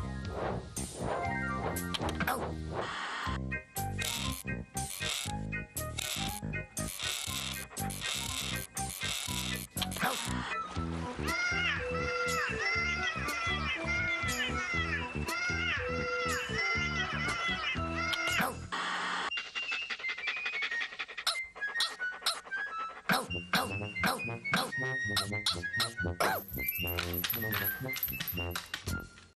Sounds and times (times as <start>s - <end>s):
Music: 0.0s - 29.3s.